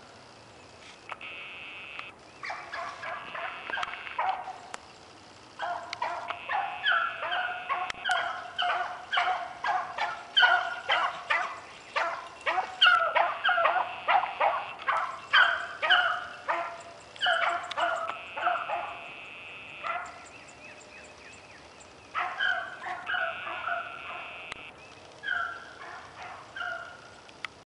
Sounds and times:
Dog: 2.4 - 4.6, 5.6 - 19.1, 19.8 - 20.2, 22.2 - 24.4, 25.2 - 27.0.

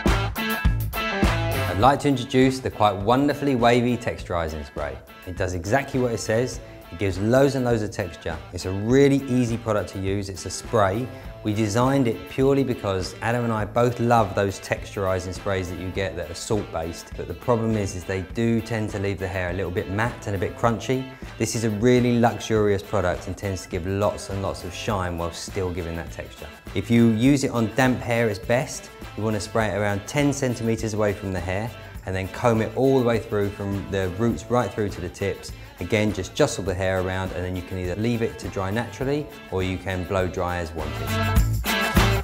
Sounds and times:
Music: 0.0 - 42.2
Speech: 1.6 - 41.2.

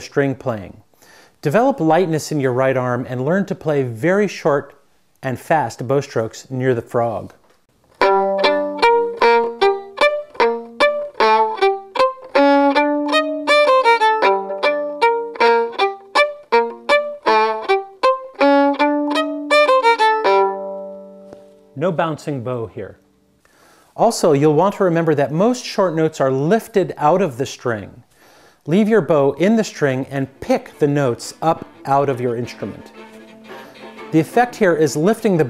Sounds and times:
Speech: 0.0 - 0.8, 1.4 - 7.4, 21.8 - 23.0, 24.0 - 28.0, 28.7 - 33.0, 34.1 - 35.4
Music: 8.0 - 21.8, 29.7 - 35.4.

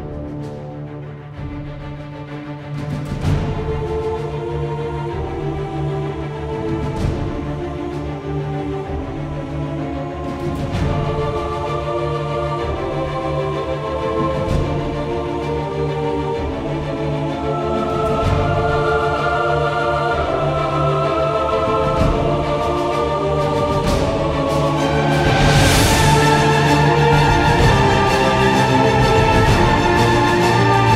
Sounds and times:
Music: 0.0 - 30.9.

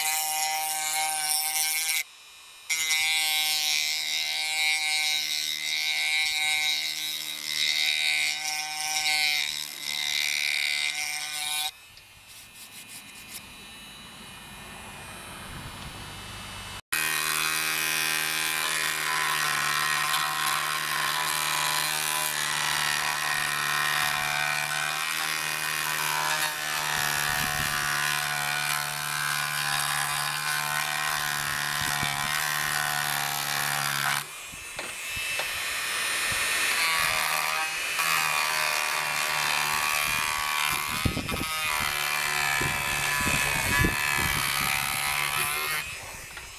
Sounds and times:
Tools: 31.8 - 35.6.

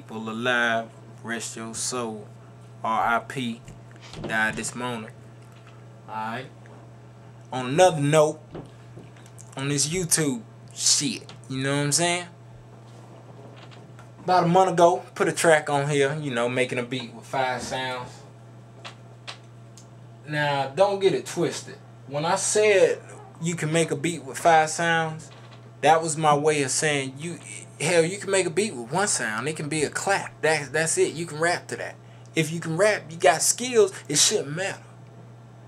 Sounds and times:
Speech: 0.0 - 5.2, 6.1 - 6.6, 7.5 - 8.4, 9.6 - 12.4, 14.2 - 18.3, 20.2 - 34.9.

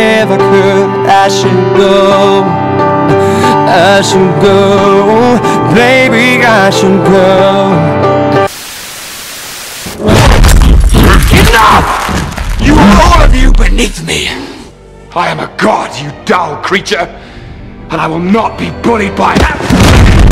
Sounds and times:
Music: 0.0 - 8.6, 10.0 - 20.3
Speech: 12.6 - 14.4, 17.9 - 19.6.

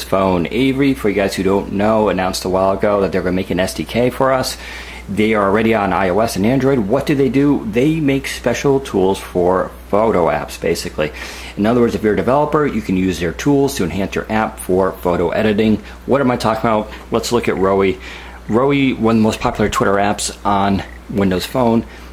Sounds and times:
Speech: 0.0 - 21.9.

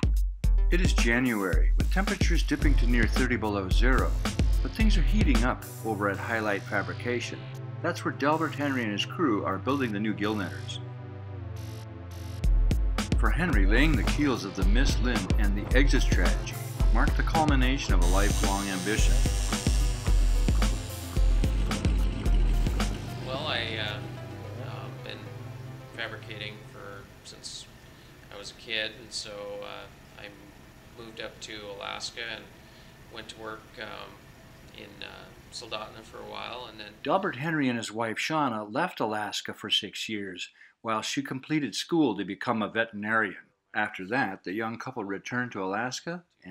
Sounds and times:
Music: 0.0 - 27.2
Speech: 0.7 - 10.8, 13.2 - 19.2, 23.3 - 25.3, 26.0 - 27.7, 28.3 - 32.5, 33.1 - 46.5.

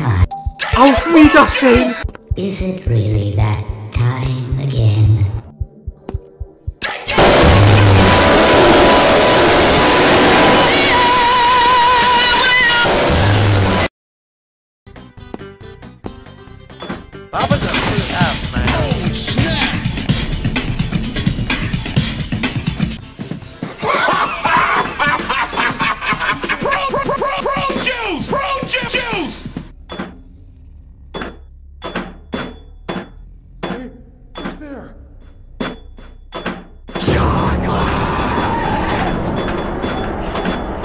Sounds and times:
Music: 0.0 - 7.2, 11.9 - 13.9, 14.9 - 29.8.

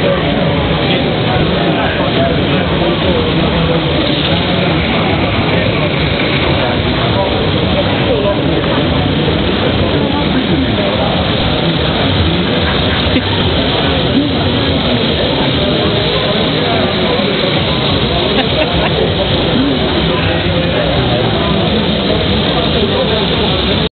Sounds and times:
Speech: 0.0 - 23.9.

